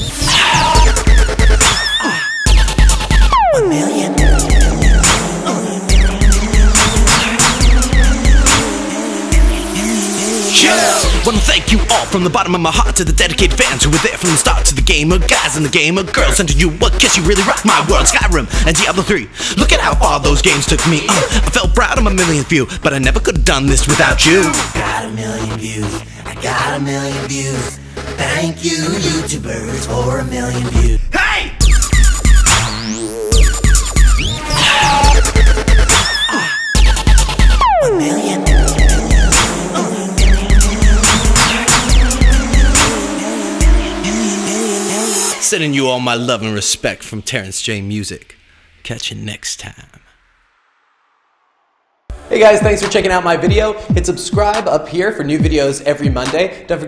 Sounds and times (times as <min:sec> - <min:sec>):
Dubstep: 0:00.0 - 0:31.0, 0:31.6 - 0:46.4
Independent music: 0:00.0 - 0:46.6, 0:52.1 - 0:56.6.